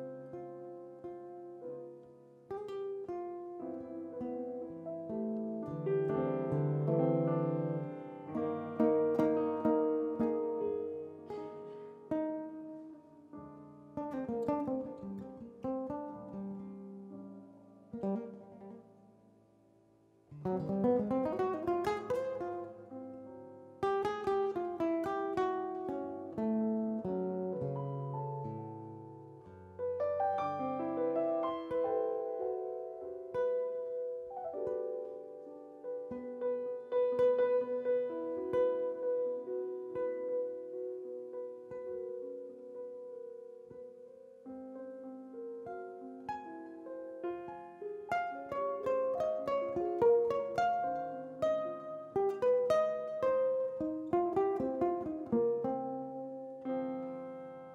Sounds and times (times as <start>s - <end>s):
Guitar: 0.0s - 57.7s.